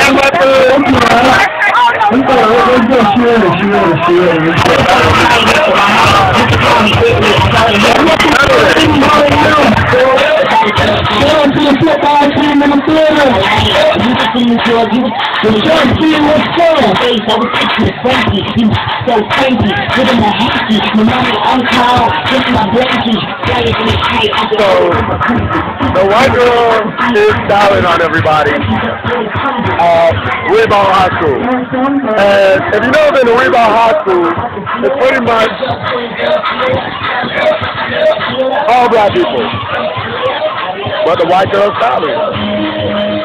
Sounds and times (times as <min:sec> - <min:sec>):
Speech: 0:00.0 - 0:35.8, 0:38.4 - 0:39.6, 0:40.9 - 0:42.4
Music: 0:00.0 - 0:43.2.